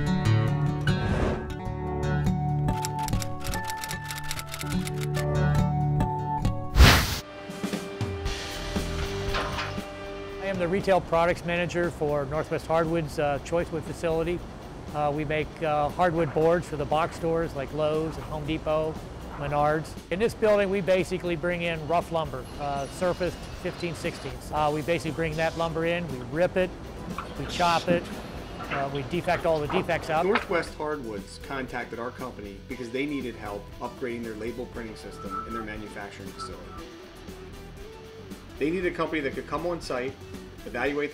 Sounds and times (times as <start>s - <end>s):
Music: 0.0s - 41.1s
Speech: 10.4s - 26.7s, 27.4s - 36.8s, 38.6s - 41.1s.